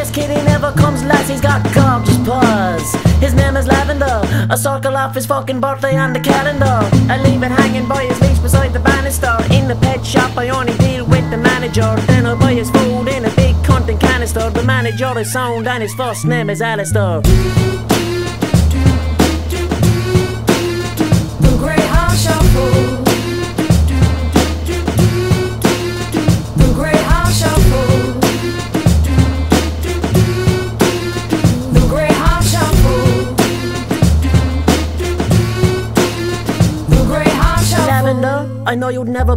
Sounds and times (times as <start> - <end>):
Music: 0.0 - 39.3.